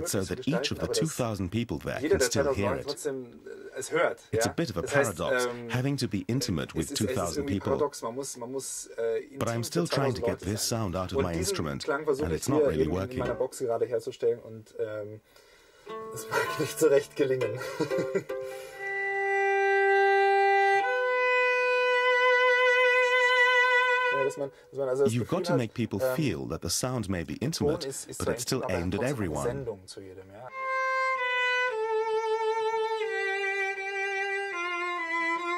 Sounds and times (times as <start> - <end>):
Cello: 15.8 - 25.5, 30.3 - 35.5.